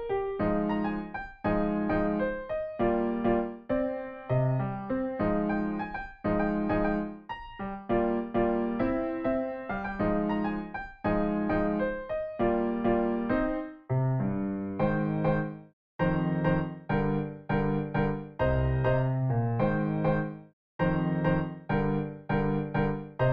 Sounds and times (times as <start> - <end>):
Electric piano: 0.0 - 23.3.